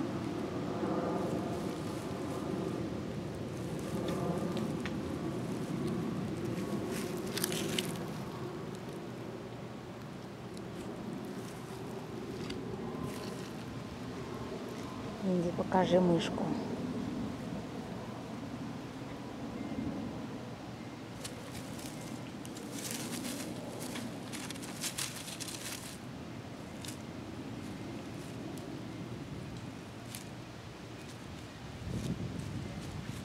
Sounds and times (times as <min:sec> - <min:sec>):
Speech: 0:15.2 - 0:16.7.